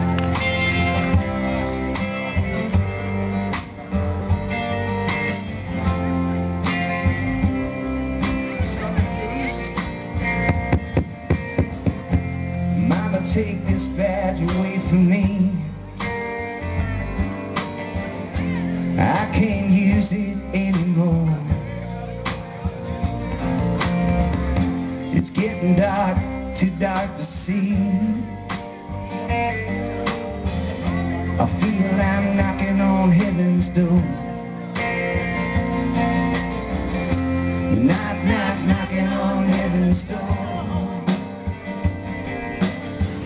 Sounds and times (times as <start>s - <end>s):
Music: 0.0s - 43.2s.